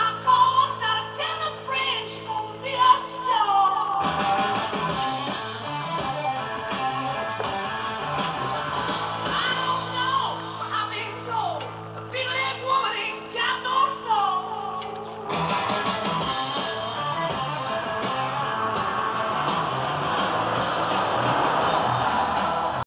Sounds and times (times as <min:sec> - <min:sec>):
Music: 0:00.0 - 0:22.8.